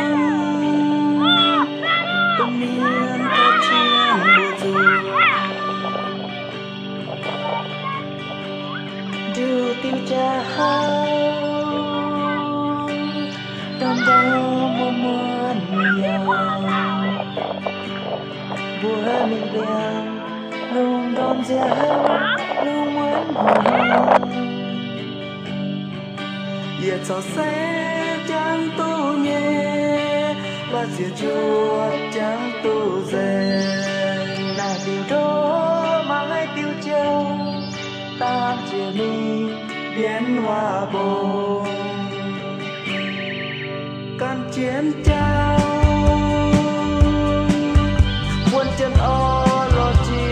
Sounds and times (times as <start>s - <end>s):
Music: 0.0s - 50.3s.